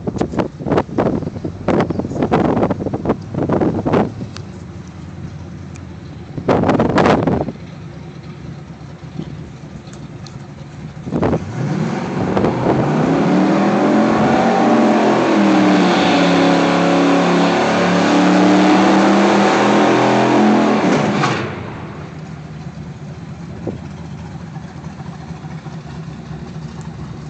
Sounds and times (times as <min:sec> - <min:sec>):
Car: 0:00.0 - 0:27.3.